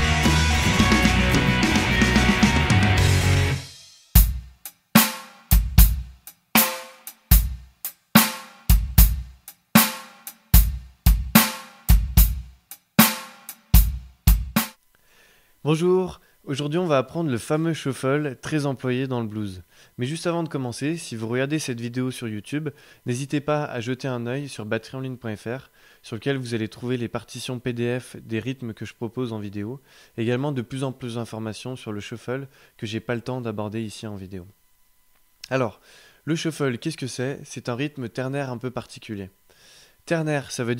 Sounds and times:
Speech: 0:15.6 - 0:34.5, 0:35.5 - 0:39.4, 0:40.1 - 0:40.7.

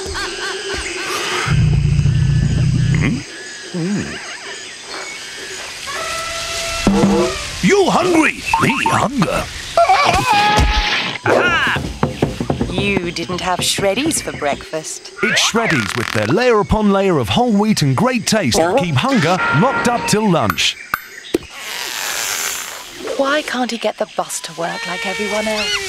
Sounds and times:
Speech: 0:07.6 - 0:09.5, 0:12.7 - 0:20.8, 0:23.2 - 0:25.8.

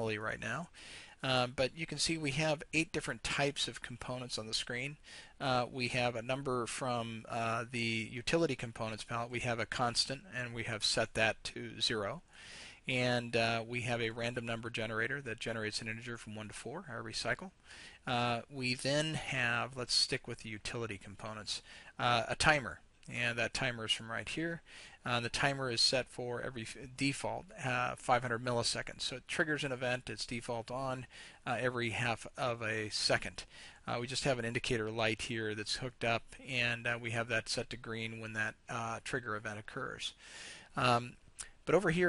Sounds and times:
Speech: 0:00.0 - 0:12.2, 0:12.8 - 0:40.2, 0:40.8 - 0:42.0.

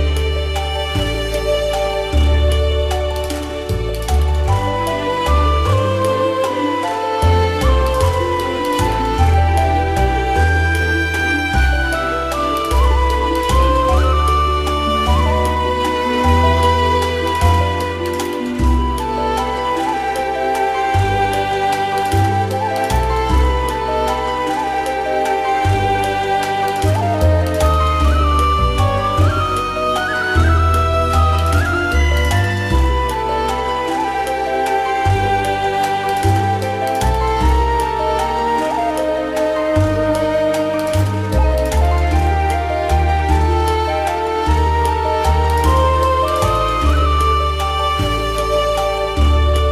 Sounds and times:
Background music: 0:00.0 - 0:49.7
Soundtrack music: 0:00.0 - 0:49.7.

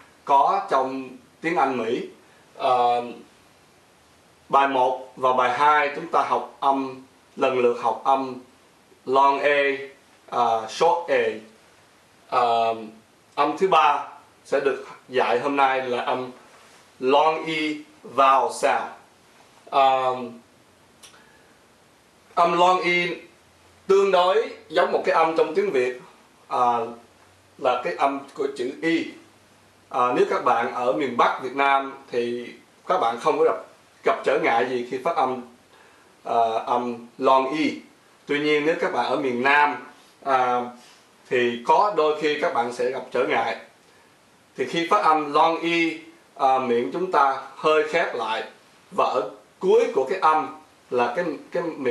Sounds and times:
Speech: 0:00.2 - 0:03.3, 0:04.5 - 0:11.6, 0:12.3 - 0:16.4, 0:17.0 - 0:20.5, 0:22.4 - 0:29.3, 0:29.9 - 0:35.6, 0:36.2 - 0:43.7, 0:44.6 - 0:51.9.

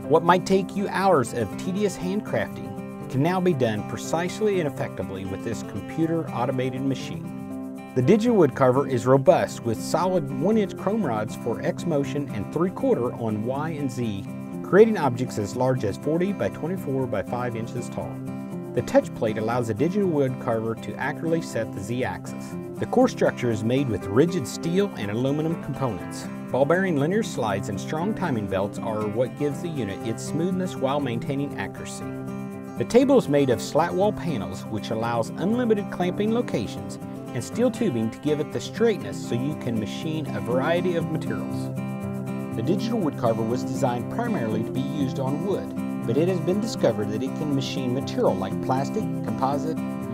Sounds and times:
Music: 0:00.0 - 0:50.1
Speech: 0:00.1 - 0:07.3, 0:08.0 - 0:18.2, 0:18.8 - 0:32.1, 0:32.8 - 0:41.7, 0:42.6 - 0:50.1.

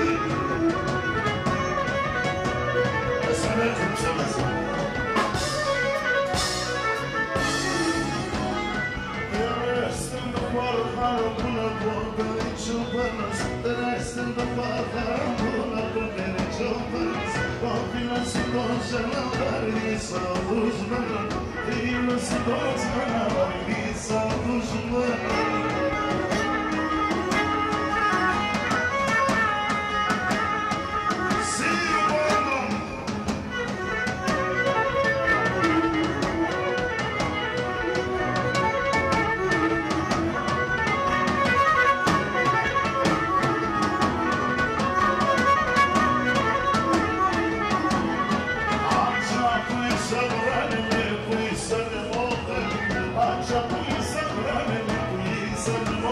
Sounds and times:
Music: 0:00.0 - 0:56.1
Speech: 0:03.2 - 0:04.7, 0:09.4 - 0:26.7, 0:31.4 - 0:33.3.

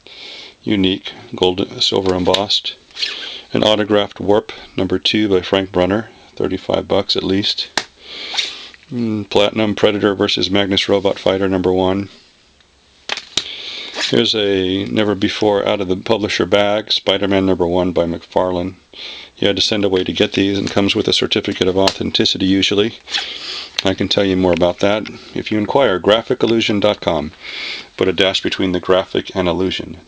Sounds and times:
Speech: 0:00.6 - 0:02.8, 0:03.5 - 0:07.8, 0:08.9 - 0:12.2, 0:14.1 - 0:18.8, 0:19.4 - 0:23.0, 0:23.8 - 0:27.4, 0:28.0 - 0:30.0.

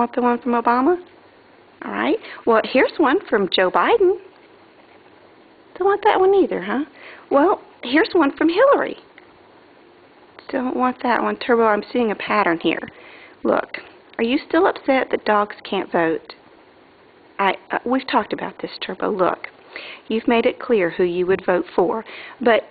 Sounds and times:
Speech: 0:00.0 - 0:01.1, 0:01.8 - 0:04.3, 0:05.8 - 0:09.1, 0:10.4 - 0:16.4, 0:17.4 - 0:19.5, 0:20.1 - 0:22.7.

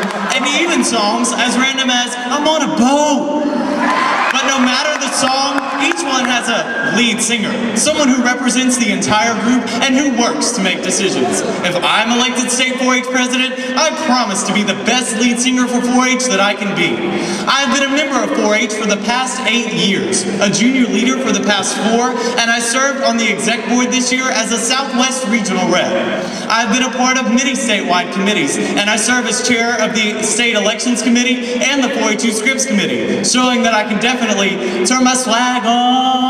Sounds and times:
Narration, monologue: 0:00.0 - 0:36.3
Male speech, man speaking: 0:00.2 - 0:03.4, 0:04.3 - 0:36.3.

